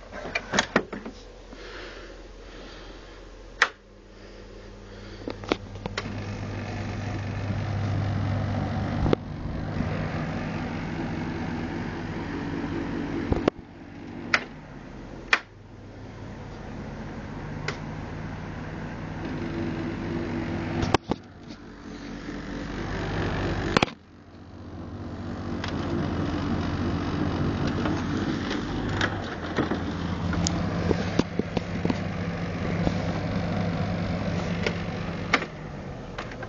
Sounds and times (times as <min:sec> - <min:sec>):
Air conditioning: 0:00.0 - 0:36.4.